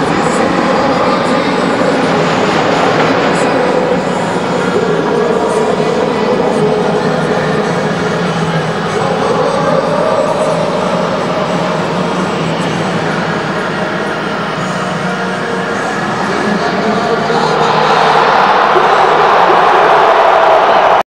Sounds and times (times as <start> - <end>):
Speech: 0.0 - 20.7.